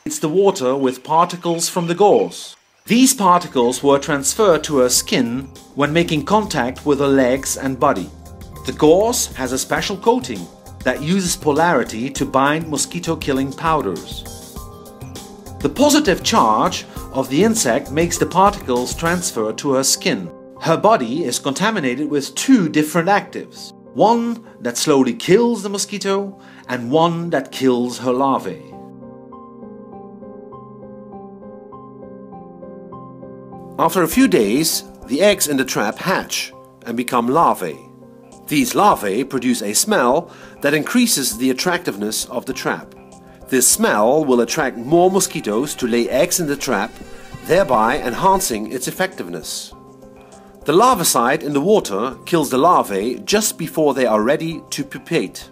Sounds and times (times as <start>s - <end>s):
Speech: 0.0s - 14.3s, 15.6s - 28.7s, 33.8s - 37.9s, 38.5s - 42.9s, 43.5s - 49.8s, 50.7s - 55.5s
Music: 0.0s - 55.5s.